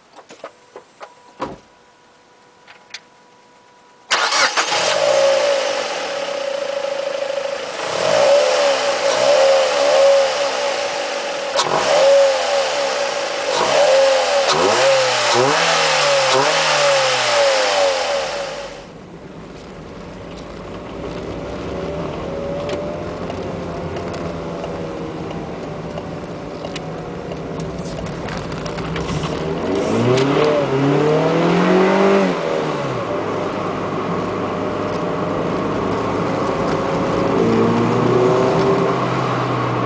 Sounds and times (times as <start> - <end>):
Car: 0.0 - 39.8
Outside, rural or natural: 0.0 - 39.8.